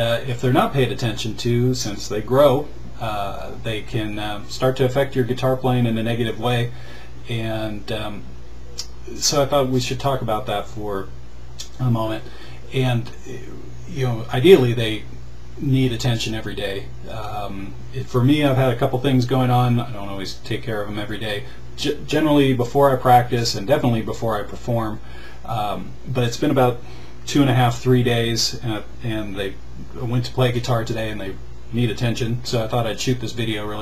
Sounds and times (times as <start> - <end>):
Speech: 0.0 - 33.8.